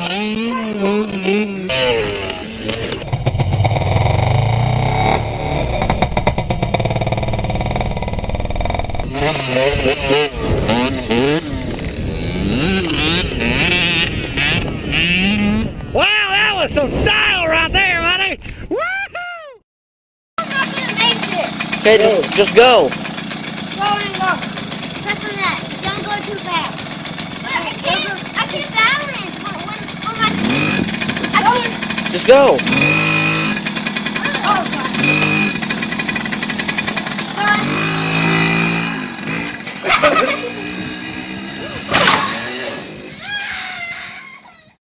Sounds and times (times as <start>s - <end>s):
Motorcycle: 0.0s - 18.7s, 20.4s - 44.8s.